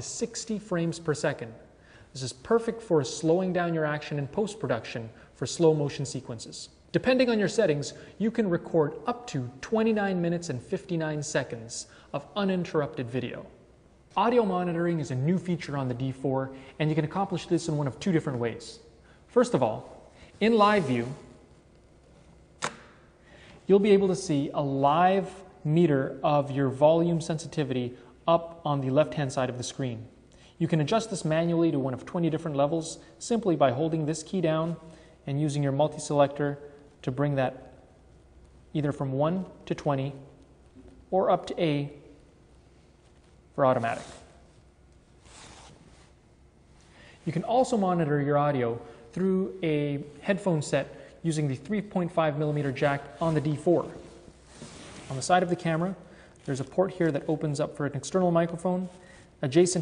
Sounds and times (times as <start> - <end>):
Speech: 0.0 - 21.3, 23.7 - 37.8, 38.7 - 42.1, 43.6 - 44.4, 47.2 - 54.2, 55.0 - 59.8.